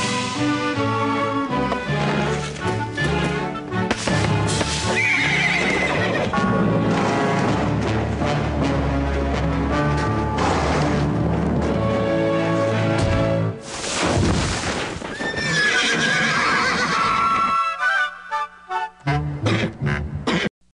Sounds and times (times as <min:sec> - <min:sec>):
Music: 0:00.0 - 0:13.8, 0:16.4 - 0:20.5
Neigh, whinny: 0:04.9 - 0:06.4, 0:15.2 - 0:17.8.